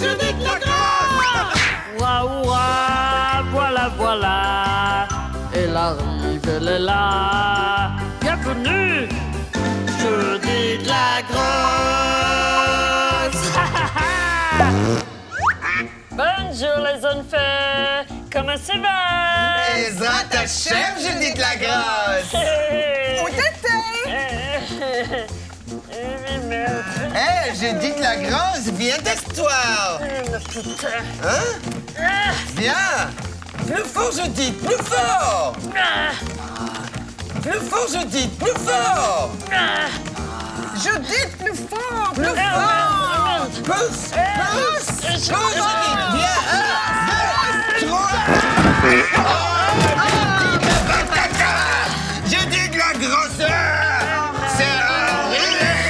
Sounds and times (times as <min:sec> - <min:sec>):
Music: 0:00.0 - 0:55.9.